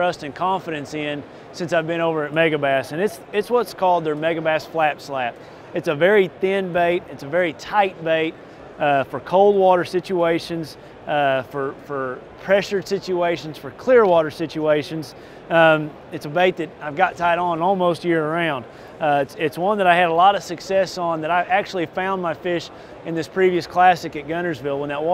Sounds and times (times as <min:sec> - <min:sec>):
Speech: 0:00.0 - 0:25.1.